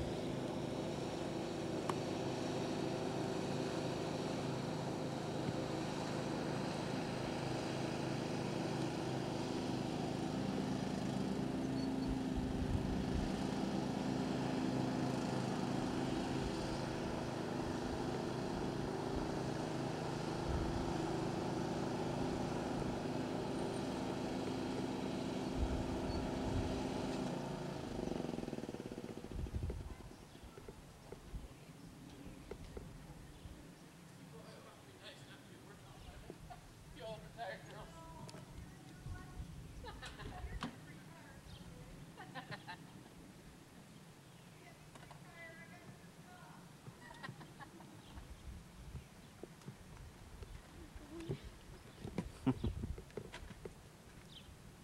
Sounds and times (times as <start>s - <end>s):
Vehicle: 0.0s - 54.8s.